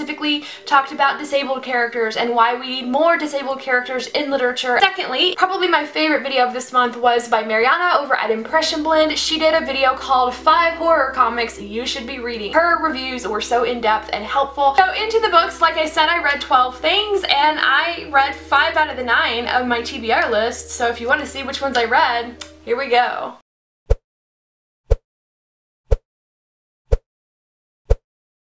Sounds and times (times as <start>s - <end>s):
Music: 0.0s - 23.4s
Speech: 0.0s - 23.4s.